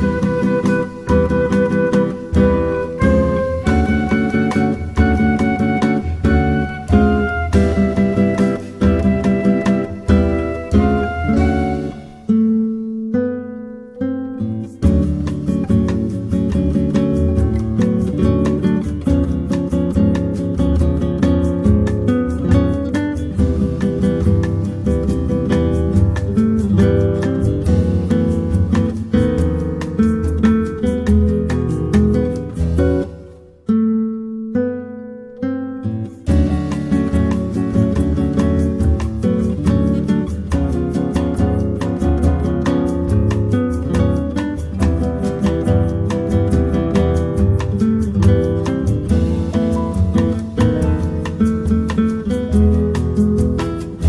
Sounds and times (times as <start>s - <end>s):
New-age music: 0.0s - 33.9s, 34.8s - 54.0s.